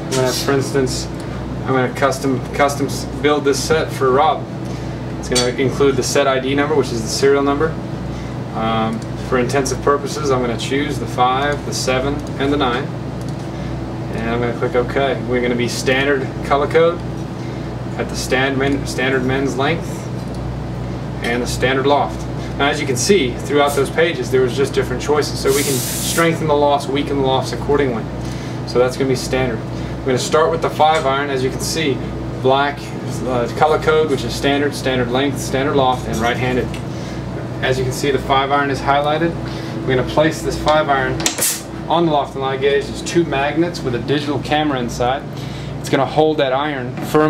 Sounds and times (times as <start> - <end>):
Speech: 0.0 - 4.5, 5.2 - 7.8, 8.5 - 13.0, 14.1 - 17.1, 18.0 - 20.1, 21.2 - 28.1, 28.7 - 36.8, 37.6 - 41.3, 41.9 - 47.3.